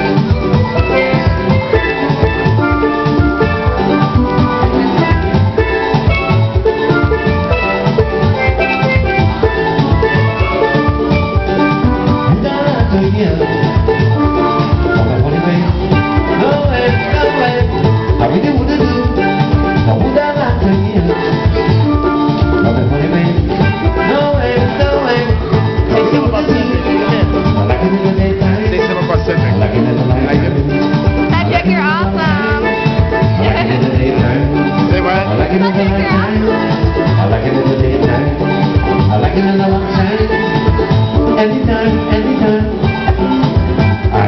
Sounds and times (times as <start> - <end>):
Bass drum: 0.0 - 44.2
Drum kit: 0.0 - 44.2.